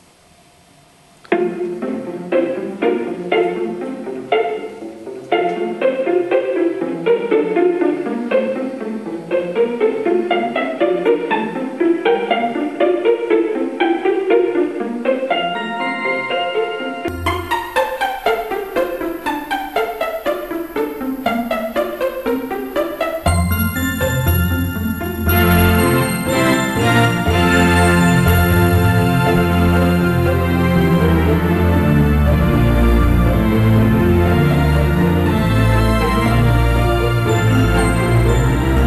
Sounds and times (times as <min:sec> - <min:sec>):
Music: 0:00.9 - 0:38.8.